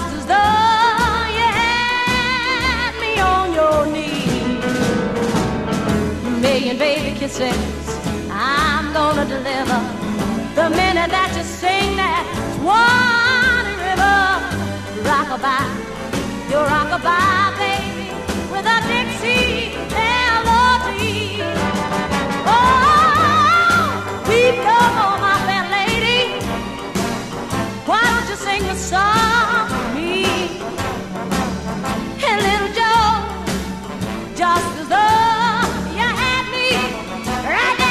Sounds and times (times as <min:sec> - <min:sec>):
Music: 0:00.0 - 0:37.9.